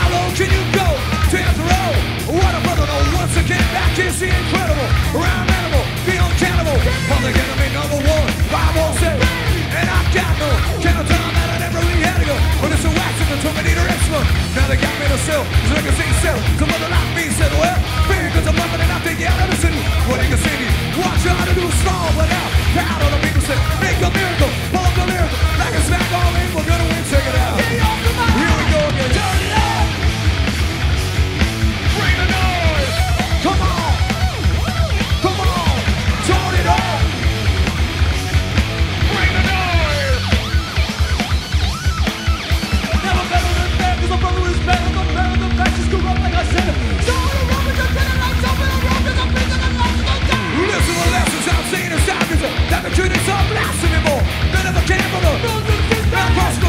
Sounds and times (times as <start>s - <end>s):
Music: 0.0s - 56.6s.